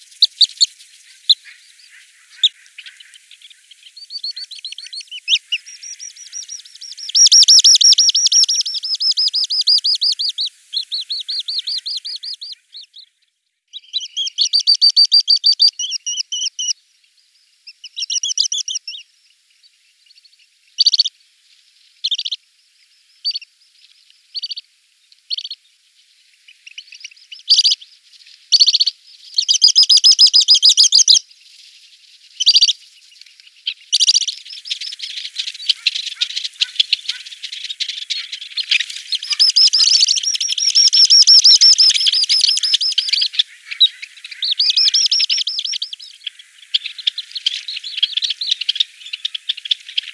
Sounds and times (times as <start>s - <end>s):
Chirp, tweet: 0.0s - 50.1s.